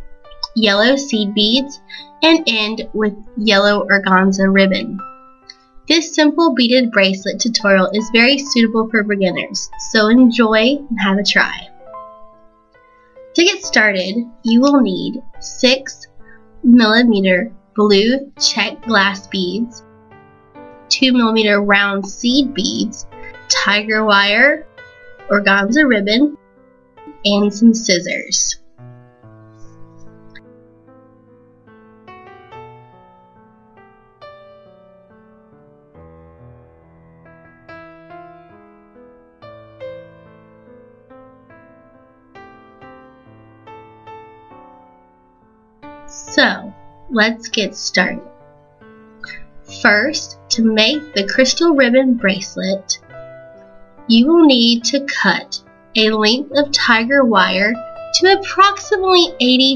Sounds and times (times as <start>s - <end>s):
Music: 0.0s - 59.7s
Speech: 0.4s - 5.0s, 5.9s - 11.7s, 13.4s - 19.8s, 20.9s - 24.7s, 25.3s - 26.4s, 27.1s - 28.6s, 46.1s - 48.3s, 49.3s - 53.0s, 54.1s - 59.7s.